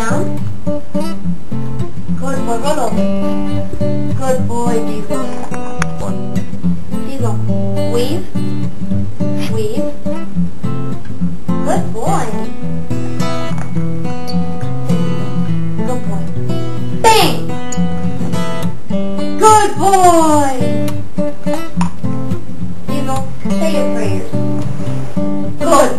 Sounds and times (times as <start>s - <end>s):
Speech: 0.0s - 0.3s, 2.2s - 3.0s, 4.2s - 6.2s, 7.1s - 8.3s, 9.4s - 10.0s, 11.6s - 12.5s, 15.8s - 16.3s, 17.0s - 17.5s, 19.4s - 20.7s, 22.9s - 24.4s, 25.6s - 25.9s
Music: 0.0s - 25.9s.